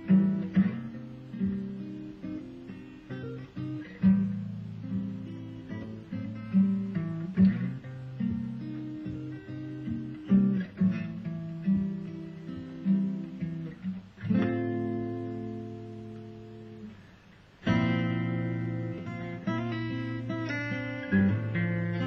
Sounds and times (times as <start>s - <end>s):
Guitar: 0.0s - 22.0s.